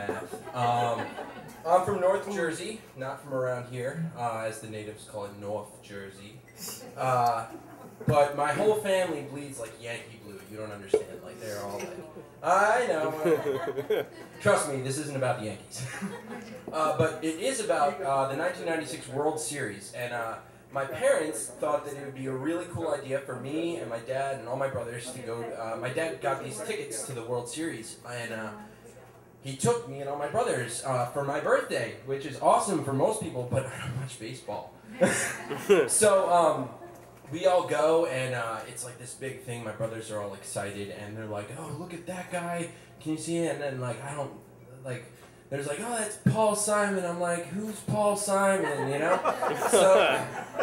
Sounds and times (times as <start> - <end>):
Speech: 0.0 - 6.4, 7.0 - 7.5, 8.1 - 13.8, 16.7 - 28.6, 29.4 - 34.7, 37.3 - 50.4.